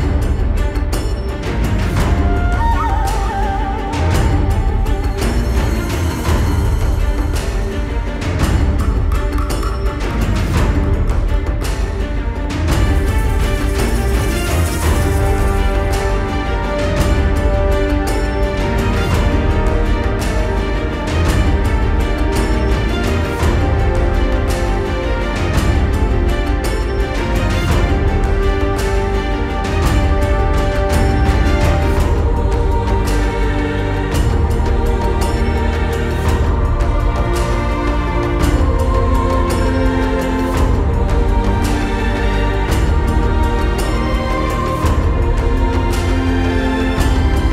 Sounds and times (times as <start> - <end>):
Music: 0.0 - 47.5.